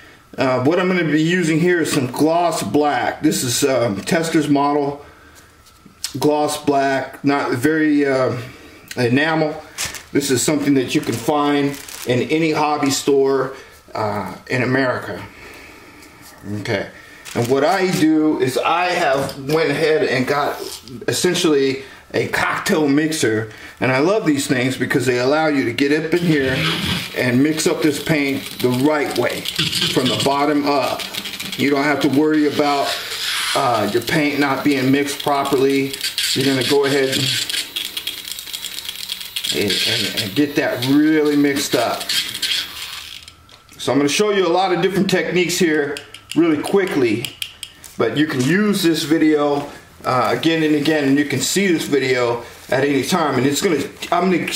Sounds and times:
Inside, small room: 0.0 - 54.5
Speech: 0.4 - 5.0, 6.1 - 15.3, 16.4 - 31.0, 31.6 - 37.5, 39.5 - 42.1, 43.8 - 47.3, 48.0 - 54.5.

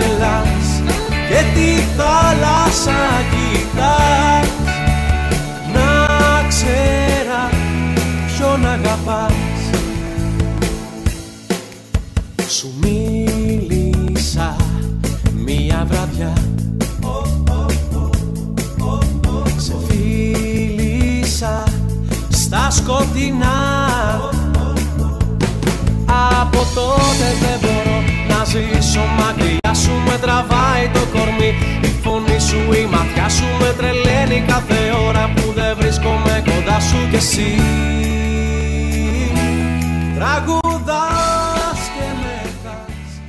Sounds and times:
Independent music: 0.0 - 43.2.

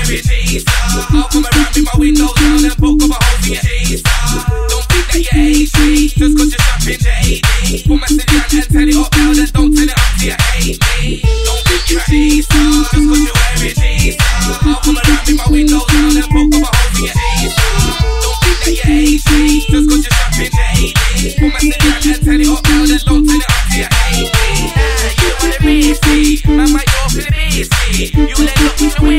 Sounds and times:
Music: 0.0 - 29.1.

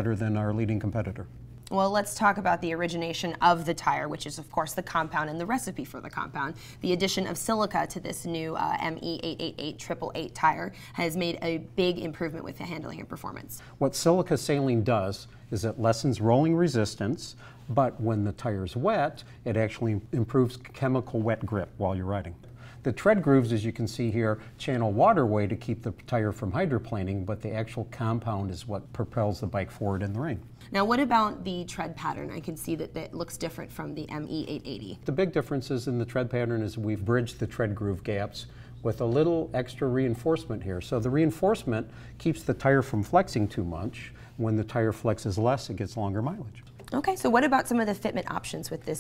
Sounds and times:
Speech: 0.0 - 49.0.

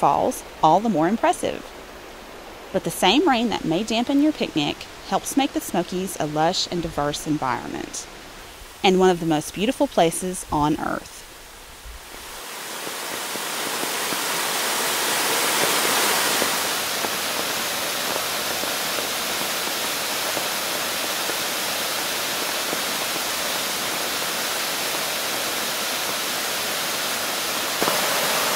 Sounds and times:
Waterfall: 0.0 - 28.5.

